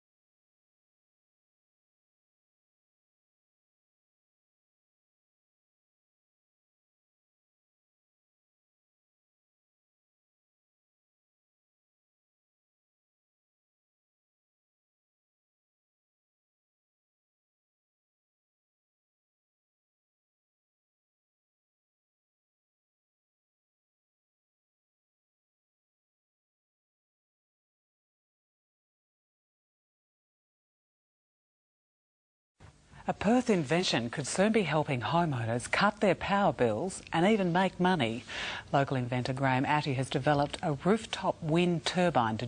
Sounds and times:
Speech: 0:33.1 - 0:42.4.

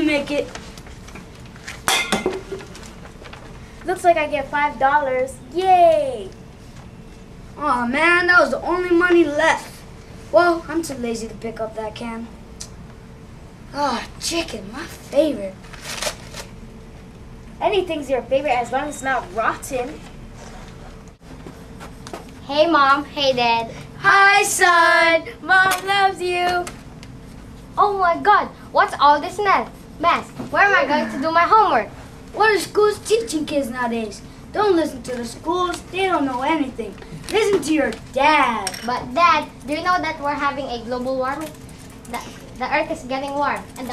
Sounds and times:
Speech: 0:07.6 - 0:12.3, 0:17.6 - 0:20.0, 0:27.8 - 0:41.5, 0:42.1 - 0:43.9.

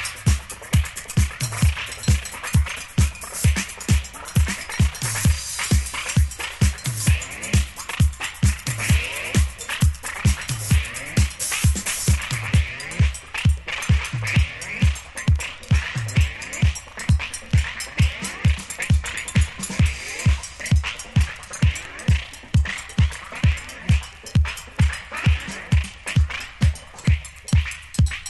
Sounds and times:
Music: 0:00.0 - 0:28.3.

